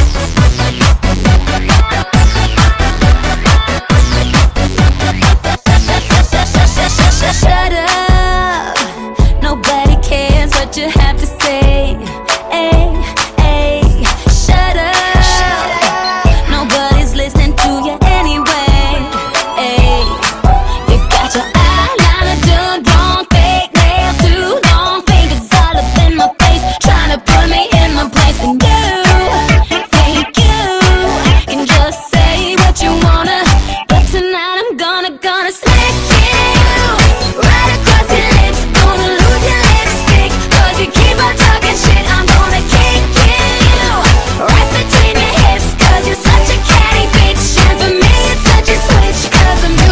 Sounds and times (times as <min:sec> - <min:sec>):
Music: 0:00.0 - 0:49.9.